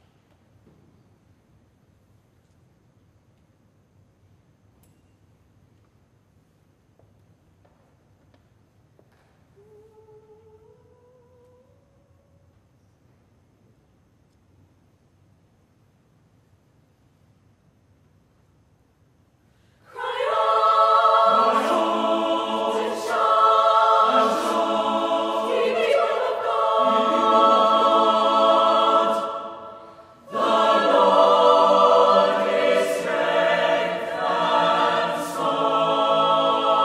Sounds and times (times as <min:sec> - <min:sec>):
Music: 0:20.0 - 0:36.8.